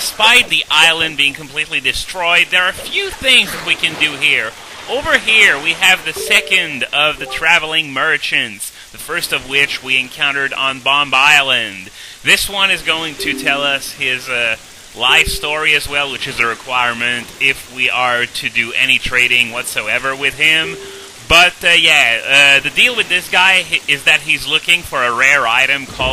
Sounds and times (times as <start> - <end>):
Speech: 0.0 - 26.1.